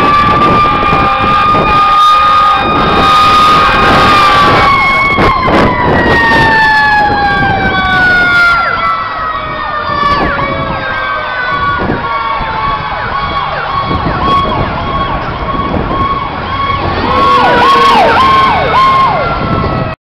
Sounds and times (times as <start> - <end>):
Truck: 0.0 - 20.0.